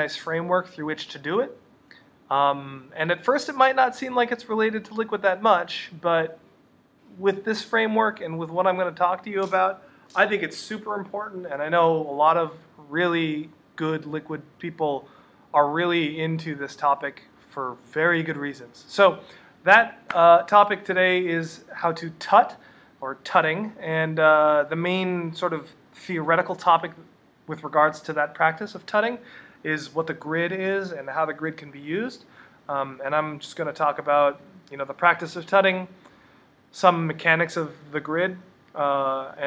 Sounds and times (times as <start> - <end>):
Speech: 0.0 - 1.6, 2.3 - 6.4, 7.1 - 36.0, 36.7 - 39.4.